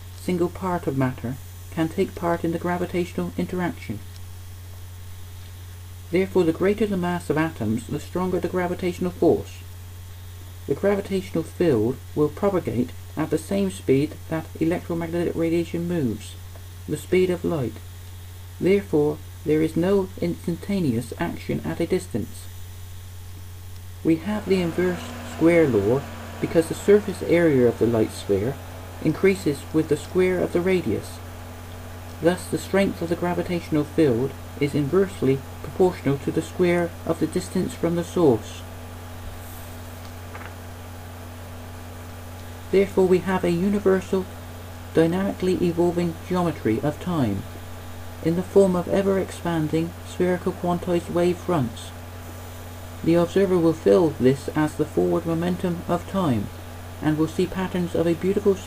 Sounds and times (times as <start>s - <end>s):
Speech: 0.2s - 4.1s, 6.1s - 9.7s, 10.7s - 17.9s, 18.6s - 22.6s, 24.0s - 31.2s, 32.2s - 38.7s, 42.7s - 47.6s, 48.2s - 52.0s, 53.0s - 58.6s.